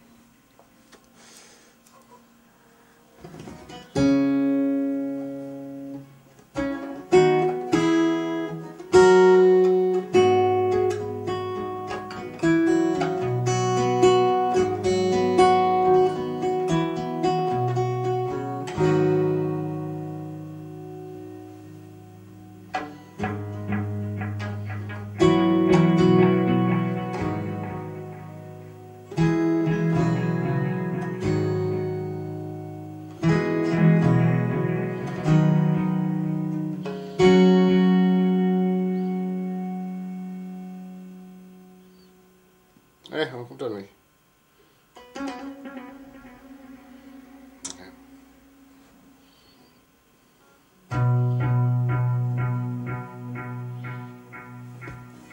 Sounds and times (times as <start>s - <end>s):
Acoustic guitar: 0.8s - 42.3s, 44.6s - 55.3s
Strum: 0.9s - 43.0s, 44.6s - 55.3s.